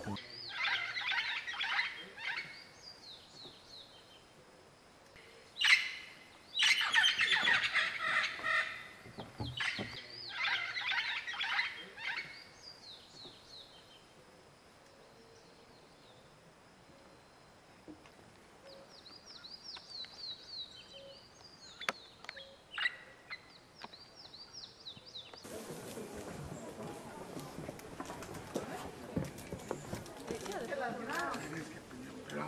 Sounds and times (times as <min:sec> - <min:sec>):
Chirp, tweet: 0:09.5 - 0:14.0, 0:18.7 - 0:25.5.